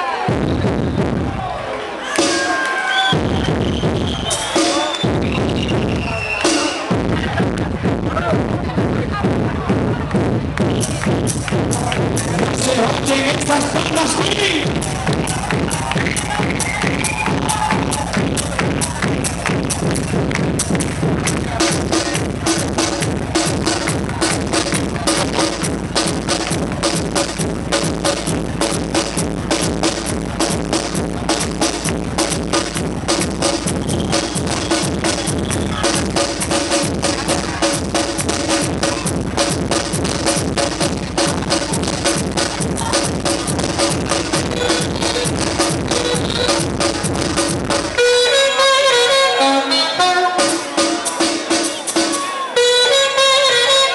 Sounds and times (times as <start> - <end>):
Percussion: 2.1 - 48.7, 50.4 - 53.7
Speech: 12.3 - 14.7.